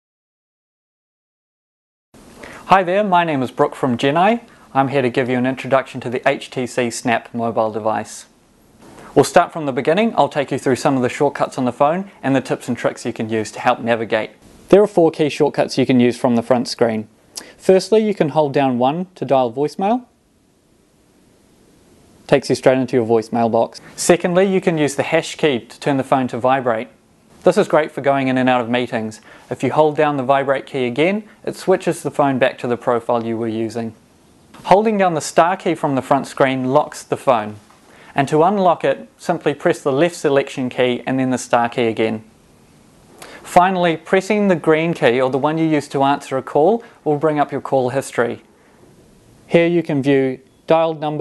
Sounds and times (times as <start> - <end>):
Speech: 2.7 - 8.3, 9.2 - 20.2, 22.3 - 34.0, 34.6 - 37.6, 38.2 - 42.3, 43.4 - 48.5, 49.5 - 51.2.